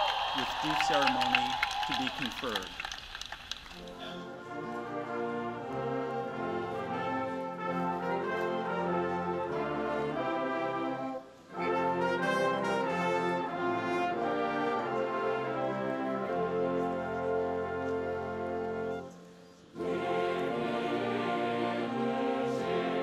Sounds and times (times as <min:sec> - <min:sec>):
Music: 0:00.7 - 0:23.0.